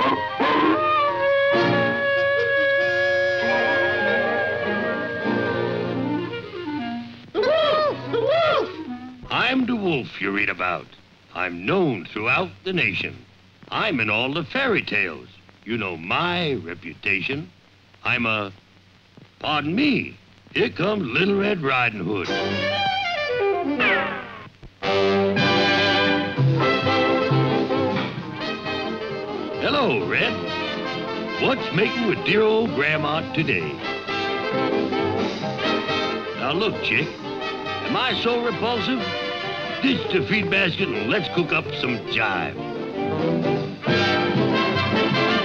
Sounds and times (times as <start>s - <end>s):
Music: 0.0s - 10.5s, 21.2s - 45.4s
Speech: 9.3s - 18.6s, 19.4s - 22.4s, 29.6s - 30.5s, 31.4s - 33.9s, 36.4s - 37.2s, 37.9s - 39.1s, 39.8s - 42.6s.